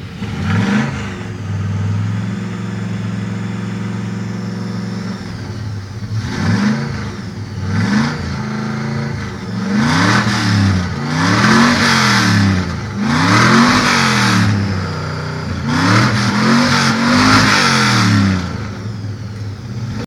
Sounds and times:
Car: 0.0 - 20.0
Accelerating, revving, vroom: 0.2 - 2.5, 6.1 - 18.8.

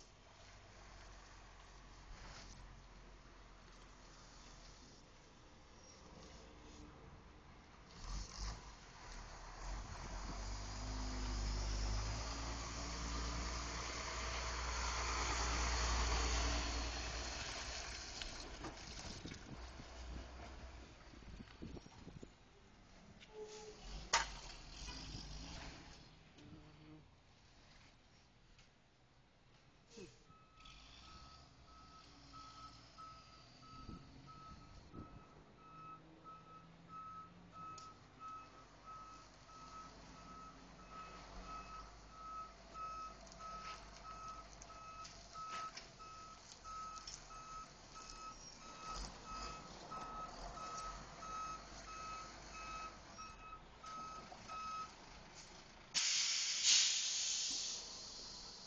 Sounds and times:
Reversing beeps: 30.3 - 54.9.

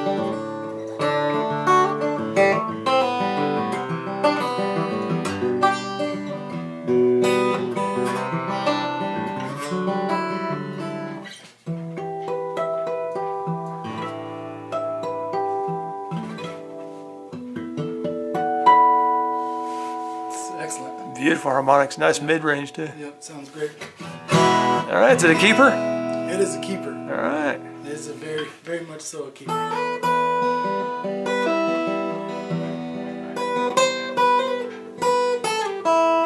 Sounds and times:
Strum: 0.0 - 28.8
Acoustic guitar: 0.0 - 36.2
Speech: 20.4 - 23.8, 24.8 - 29.6.

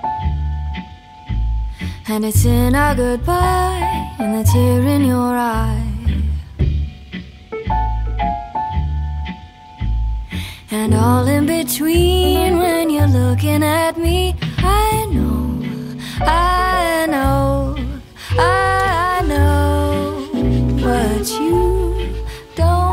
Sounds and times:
Tender music: 0.0 - 22.9.

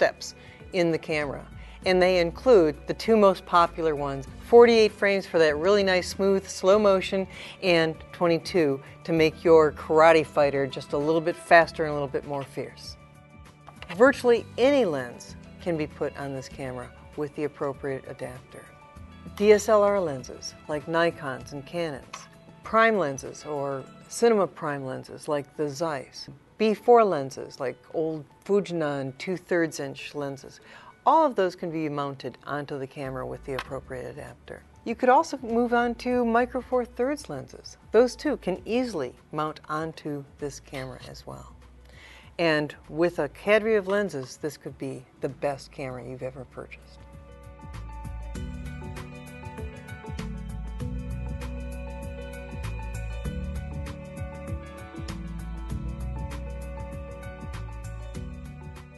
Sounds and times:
Speech: 0.0 - 13.0, 13.9 - 18.7, 19.4 - 41.5, 42.4 - 46.9.

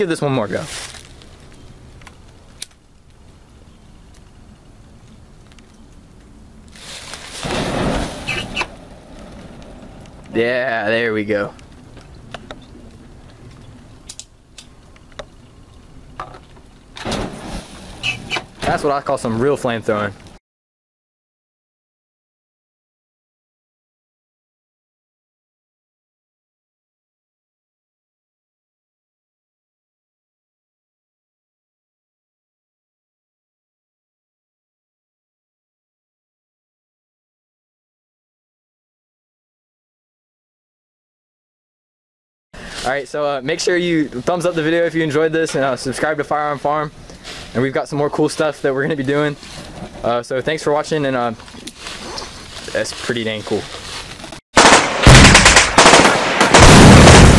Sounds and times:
Speech: 0.0 - 0.9, 10.3 - 11.6, 18.6 - 20.2, 42.8 - 47.0, 47.6 - 49.4, 50.0 - 51.4, 52.7 - 53.8
Fire: 0.0 - 20.4, 42.6 - 57.3
Machine gun: 54.6 - 57.3.

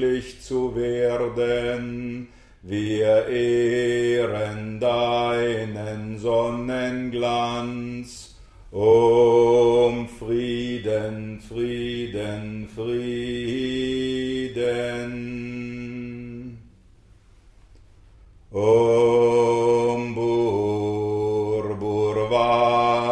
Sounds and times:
Mantra: 0.0 - 16.7, 18.5 - 23.1.

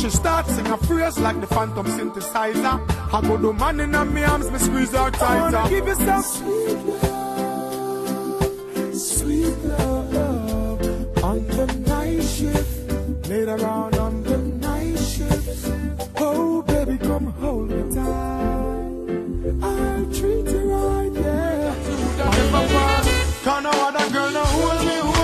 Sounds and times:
Reggae: 0.0 - 25.2.

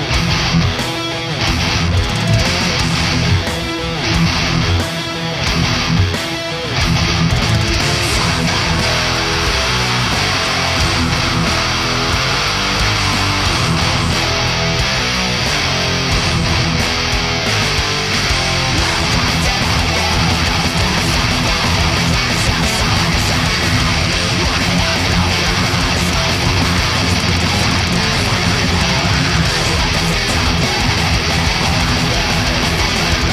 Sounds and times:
Guitar: 0.0 - 33.3.

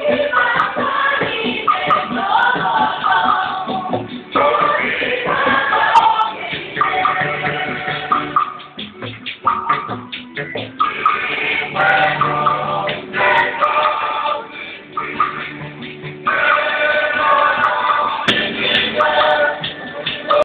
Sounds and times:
Choir: 0.0 - 8.6, 10.8 - 20.4.

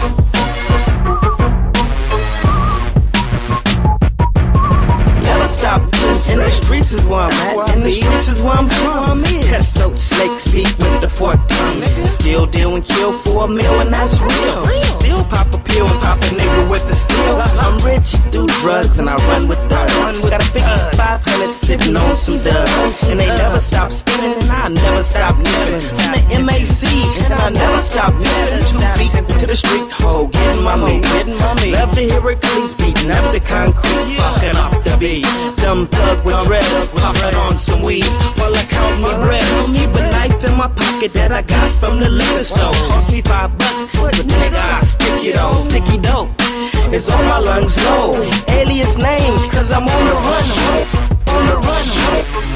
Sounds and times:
Music: 0.0 - 52.5.

